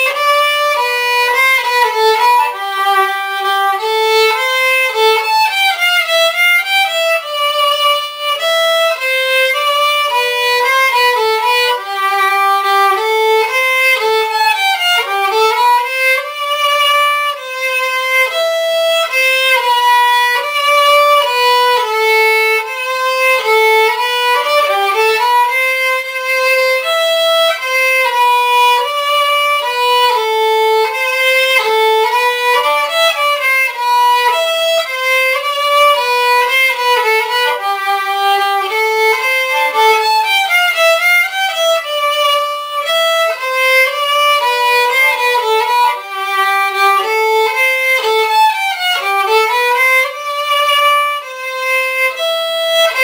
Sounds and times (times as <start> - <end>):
Violin, fiddle: 0.0 - 53.0.